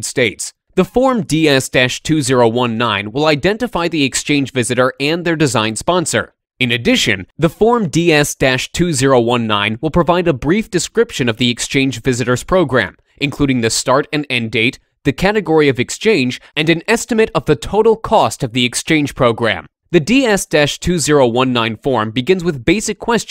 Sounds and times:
Speech: 0:00.0 - 0:23.3.

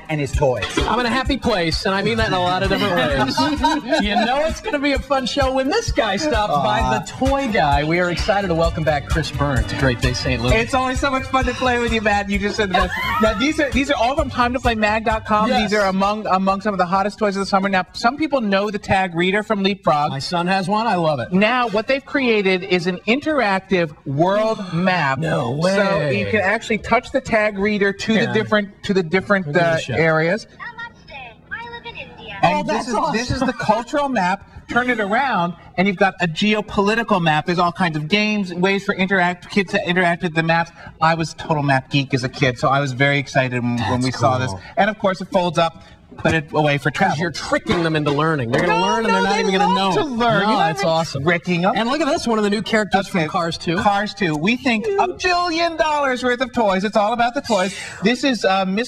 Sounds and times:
Speech: 0:00.0 - 0:16.7, 0:24.1 - 0:30.1, 0:32.4 - 0:34.1.

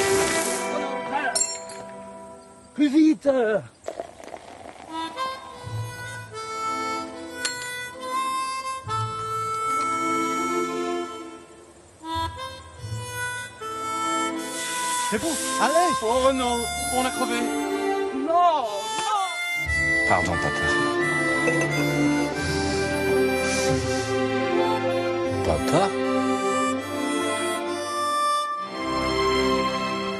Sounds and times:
Music: 0:00.0 - 0:02.8, 0:04.9 - 0:30.1.

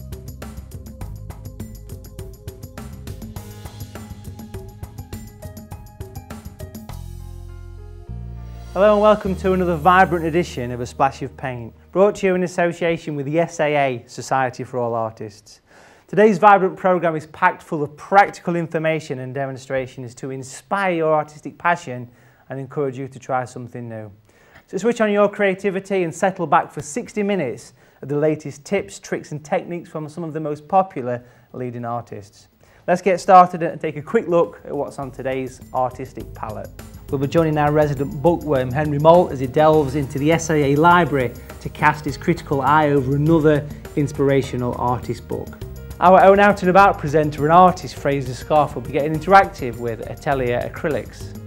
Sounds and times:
Music: 0:00.0 - 0:14.1, 0:33.3 - 0:51.4
Speech: 0:08.8 - 0:51.4.

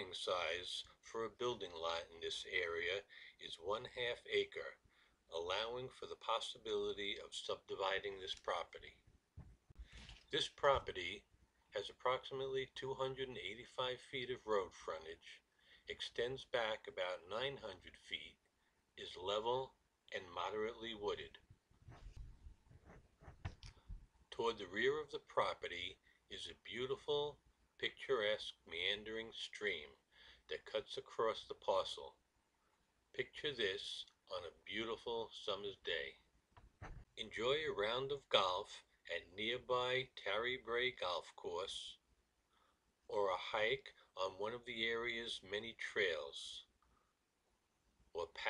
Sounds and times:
Speech: 0:00.0 - 0:09.1, 0:10.2 - 0:21.5, 0:24.3 - 0:32.2, 0:33.1 - 0:36.3, 0:37.2 - 0:42.1, 0:43.1 - 0:46.8, 0:48.1 - 0:48.4.

